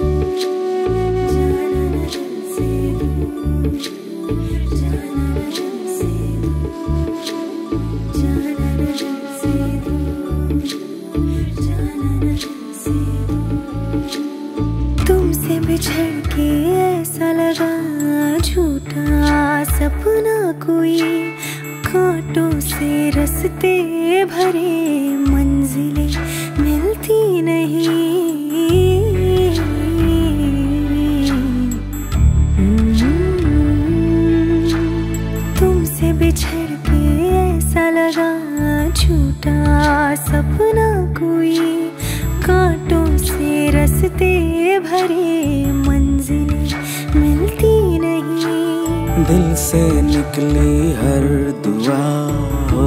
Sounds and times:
Music: 0:00.0 - 0:52.8.

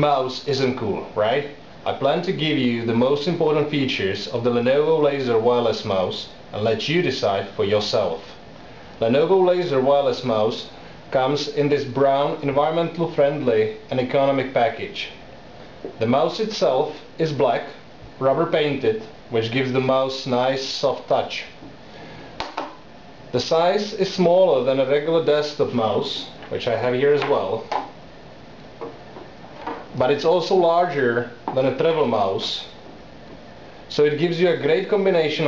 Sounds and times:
Speech: 0:00.0 - 0:08.4, 0:09.0 - 0:15.2, 0:16.0 - 0:21.6, 0:23.3 - 0:27.7, 0:29.9 - 0:32.8, 0:33.9 - 0:35.4.

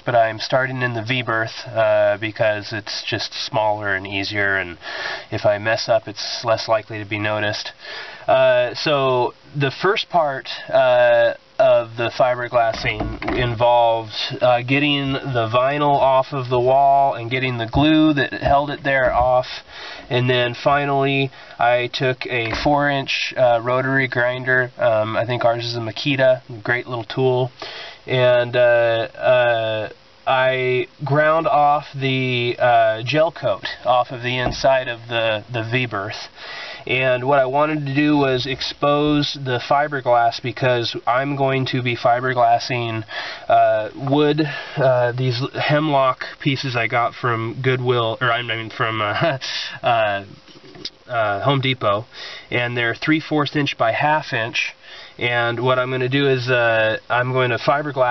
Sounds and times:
Speech: 0:00.0 - 0:58.1.

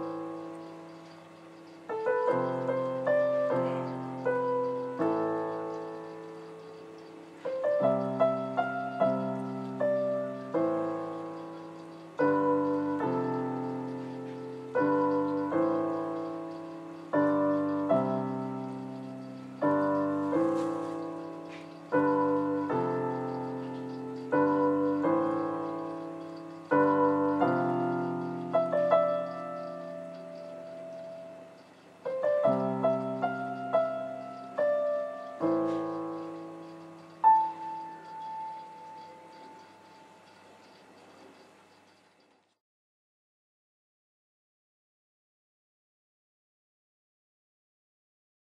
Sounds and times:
Music: 0:00.0 - 0:40.8.

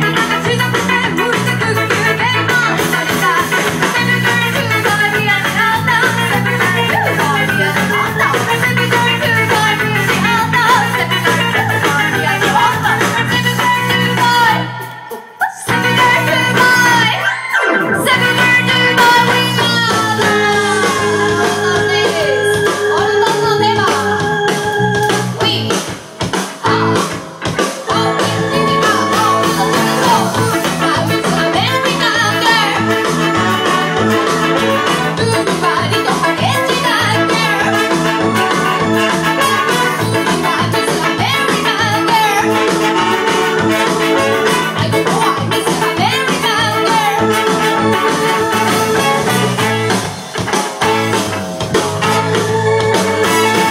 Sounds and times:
Ska: 0:00.0 - 0:53.7
Singing: 0:27.8 - 0:49.2.

